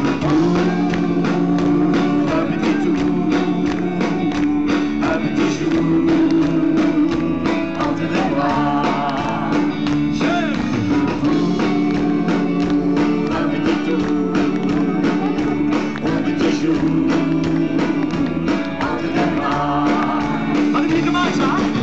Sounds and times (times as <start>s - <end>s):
Music: 0.0s - 21.8s.